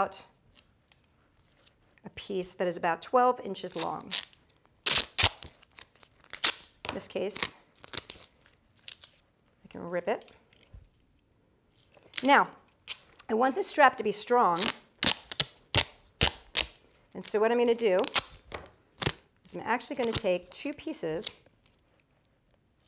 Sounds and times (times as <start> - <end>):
Speech: 2.1 - 4.1, 6.9 - 7.5, 9.7 - 10.3, 12.2 - 12.6, 13.2 - 14.7, 17.2 - 18.1, 19.5 - 21.4.